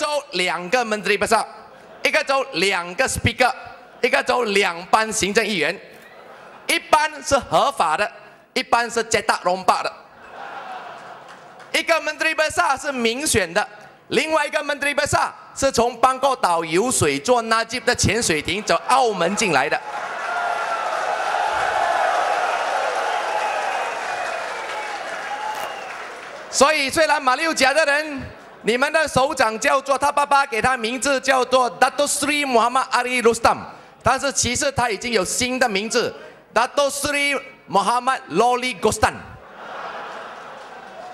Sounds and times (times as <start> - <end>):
Male speech, man speaking: 0.0 - 5.8, 6.7 - 10.0, 11.8 - 19.8, 26.6 - 39.4
Narration, monologue: 0.0 - 10.3, 11.2 - 19.9, 26.5 - 39.5.